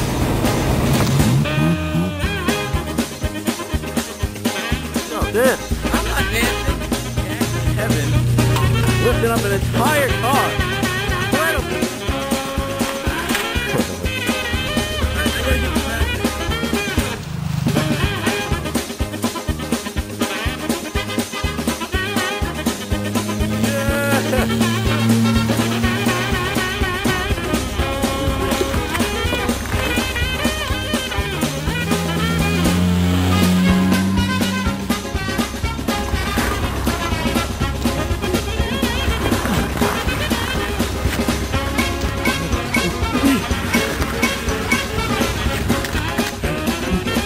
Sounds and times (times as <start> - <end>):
Music: 0.0 - 47.2
Skidding: 0.0 - 47.2.